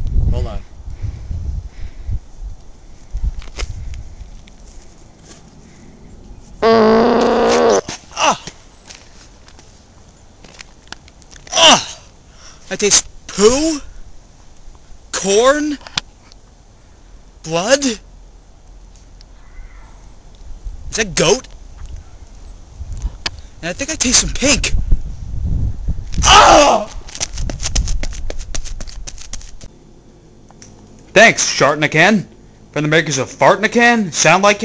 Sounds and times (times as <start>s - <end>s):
Male speech, man speaking: 0.3s - 0.7s, 12.7s - 13.8s, 15.2s - 15.8s, 17.5s - 18.0s, 21.0s - 21.5s, 23.6s - 24.8s, 31.2s - 34.6s.